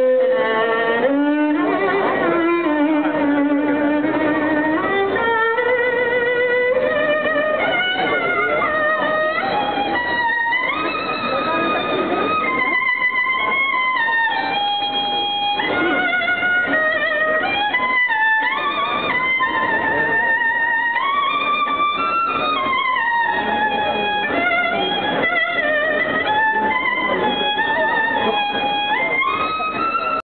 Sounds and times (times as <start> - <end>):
Violin, fiddle: 0.0 - 30.2
Speech: 1.0 - 30.2.